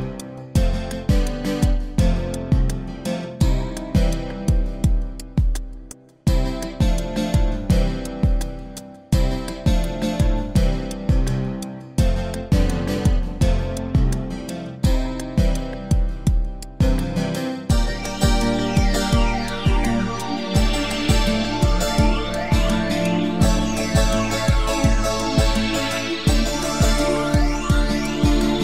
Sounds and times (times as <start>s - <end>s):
Guitar: 0.0s - 28.6s.